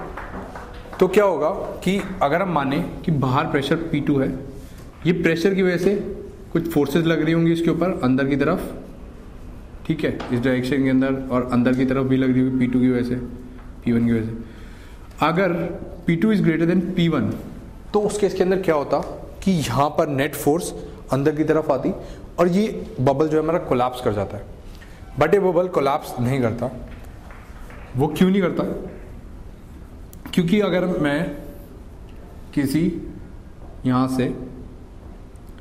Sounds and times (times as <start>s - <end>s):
Speech: 1.0s - 8.9s, 9.8s - 14.4s, 15.2s - 24.6s, 25.2s - 26.9s, 28.0s - 29.0s, 30.3s - 31.5s, 32.5s - 33.2s, 33.8s - 34.6s.